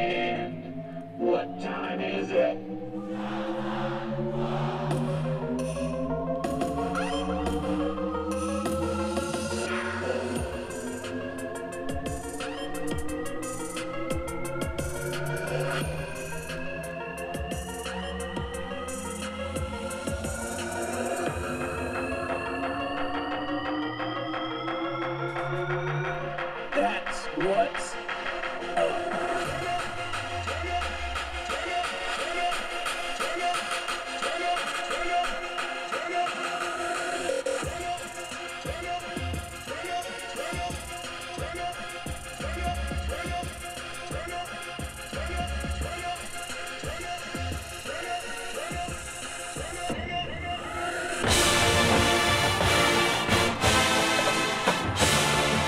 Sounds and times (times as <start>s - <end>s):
Music: 0.0s - 55.6s.